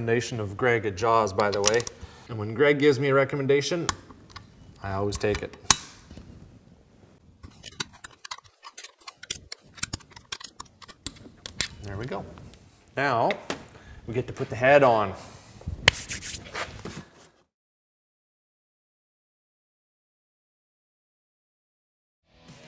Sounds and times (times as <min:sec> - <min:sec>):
Speech: 0:00.0 - 0:03.9, 0:04.8 - 0:05.6, 0:11.8 - 0:12.4, 0:13.0 - 0:13.4, 0:14.1 - 0:15.2.